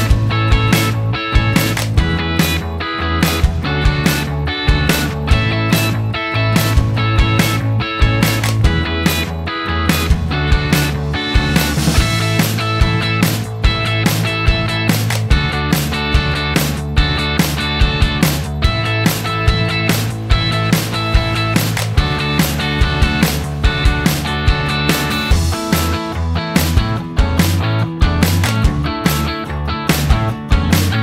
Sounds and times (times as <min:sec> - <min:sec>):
Music: 0:00.0 - 0:31.0.